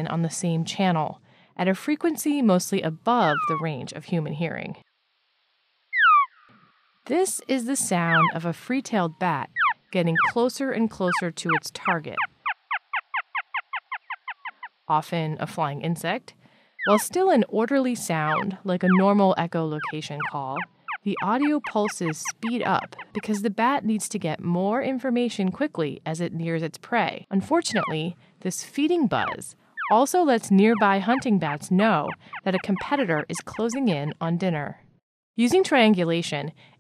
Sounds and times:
Speech: 0.0 - 4.8, 7.1 - 12.2, 14.9 - 34.8, 35.4 - 36.6.

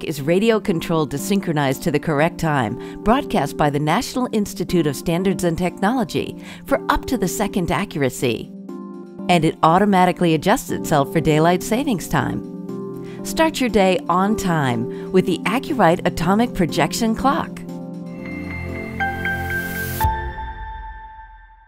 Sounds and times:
Speech: 0.0 - 8.5, 9.3 - 12.4, 13.3 - 17.6
Music: 0.0 - 21.6.

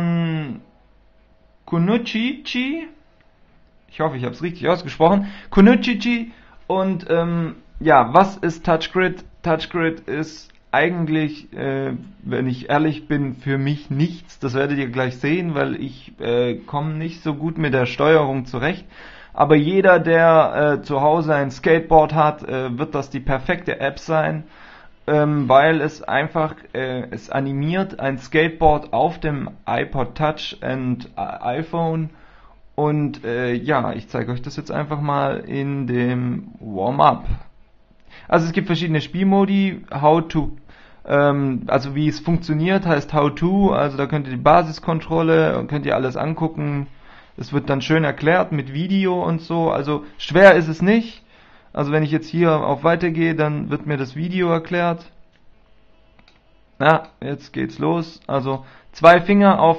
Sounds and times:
Speech: 0.0 - 0.7, 1.6 - 3.0, 3.9 - 32.2, 32.8 - 37.6, 38.3 - 55.2, 56.8 - 59.7.

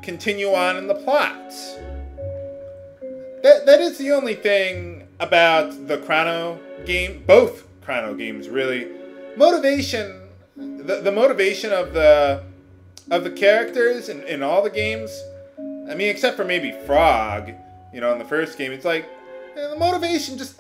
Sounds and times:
Speech: 0.0 - 1.8, 3.5 - 15.3, 15.9 - 20.6.

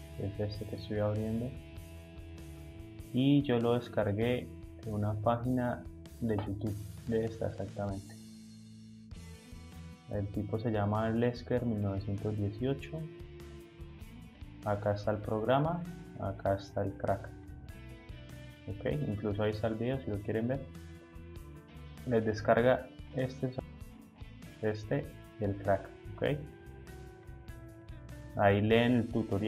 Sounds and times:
Music: 0.0 - 29.4
Speech: 0.2 - 1.6, 3.1 - 8.1, 10.1 - 13.1, 14.6 - 17.3, 18.7 - 20.7, 22.1 - 23.6, 24.6 - 26.5, 28.4 - 29.4.

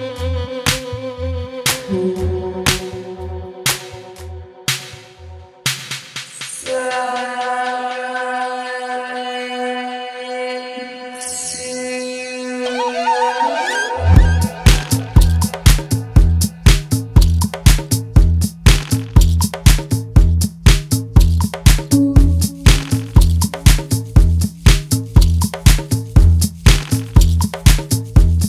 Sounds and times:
Music: 0.0 - 28.4.

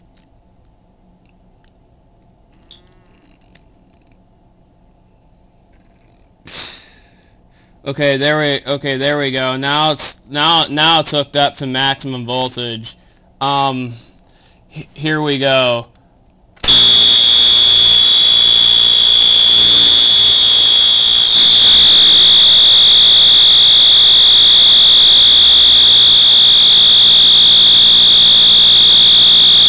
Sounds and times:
Speech: 7.9 - 14.0, 14.8 - 16.0
Fire alarm: 16.7 - 29.6.

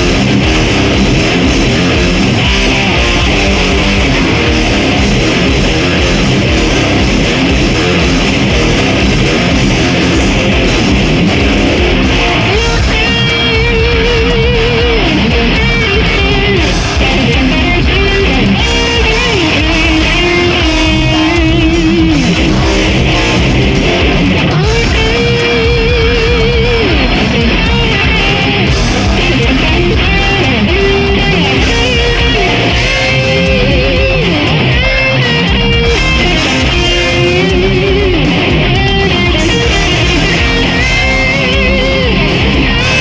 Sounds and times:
Electric guitar: 0.0 - 43.0
Strum: 0.0 - 43.0.

